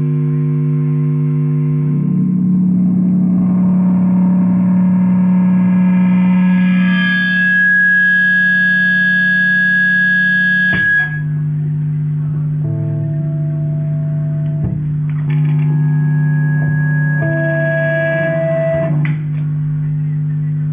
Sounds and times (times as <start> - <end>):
Inside, small room: 0.0 - 20.7
Reverberation: 0.0 - 20.7
Guitar: 0.4 - 20.7.